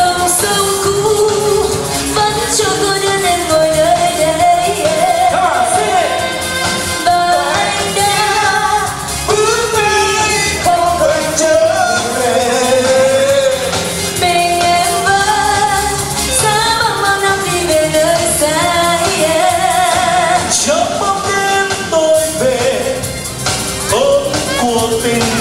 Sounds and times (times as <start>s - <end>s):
Music: 0.0s - 25.4s.